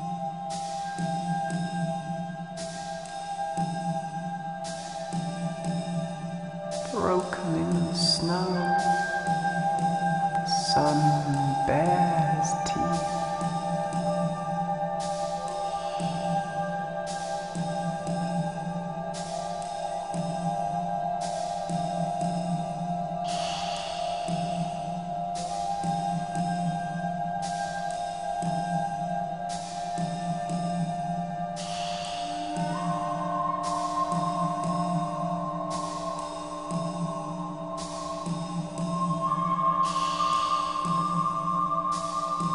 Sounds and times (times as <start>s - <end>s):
Sad music: 0.0s - 42.5s.